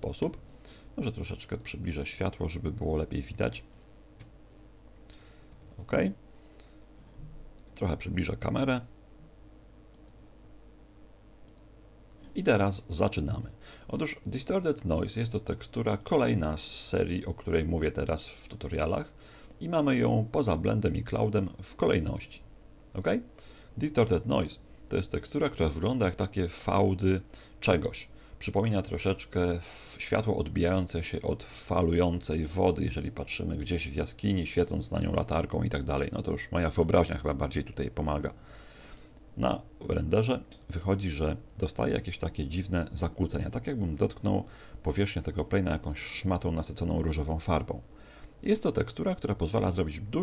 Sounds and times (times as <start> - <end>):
Speech: 0.0 - 0.4, 1.0 - 3.7, 5.8 - 6.2, 7.7 - 8.9, 12.3 - 38.4, 39.4 - 50.2.